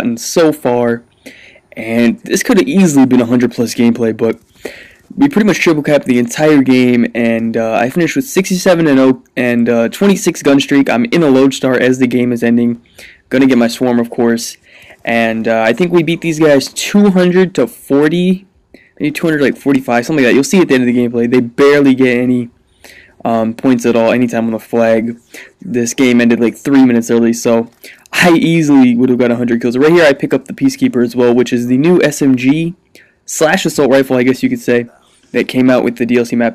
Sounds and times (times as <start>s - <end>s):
Speech: 0.0s - 1.1s, 1.7s - 22.6s, 23.2s - 36.5s.